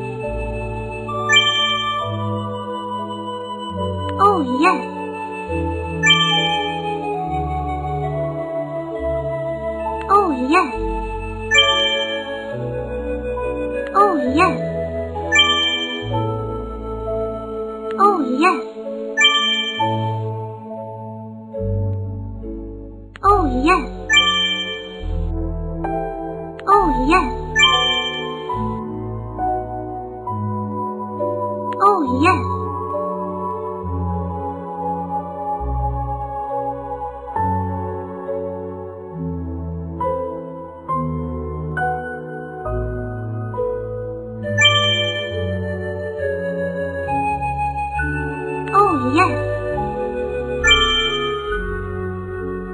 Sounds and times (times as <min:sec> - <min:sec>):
Child speech, kid speaking: 0:04.2 - 0:04.9, 0:10.1 - 0:10.8, 0:14.0 - 0:14.6, 0:18.0 - 0:18.7, 0:23.3 - 0:24.0, 0:26.7 - 0:27.5, 0:31.8 - 0:32.6, 0:48.7 - 0:49.5.